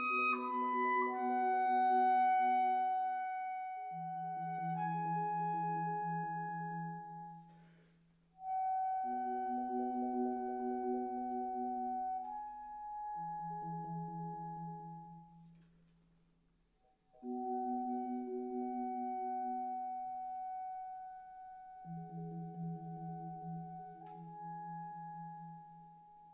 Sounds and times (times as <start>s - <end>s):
Clarinet: 0.0s - 15.8s, 17.1s - 26.3s.